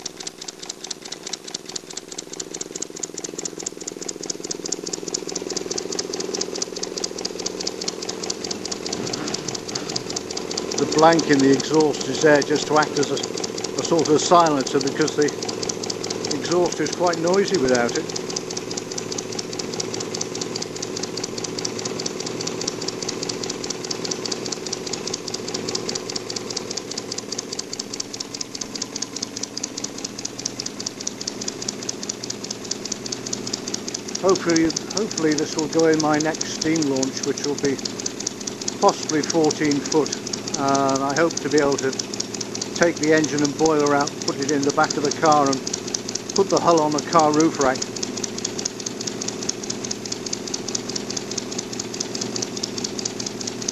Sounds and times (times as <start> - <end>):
Engine: 0.0 - 53.7
Speech: 10.8 - 15.4, 16.3 - 18.1, 34.2 - 37.8, 38.8 - 42.0, 42.8 - 45.6, 46.4 - 47.8.